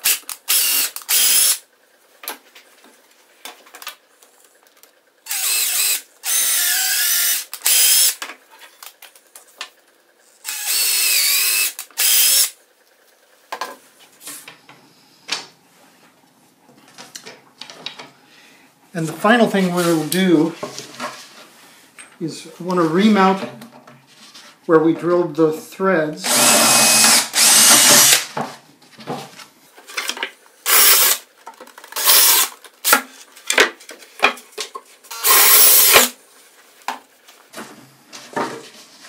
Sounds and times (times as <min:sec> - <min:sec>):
Speech: 0:18.9 - 0:20.6, 0:22.2 - 0:23.6, 0:24.7 - 0:26.3.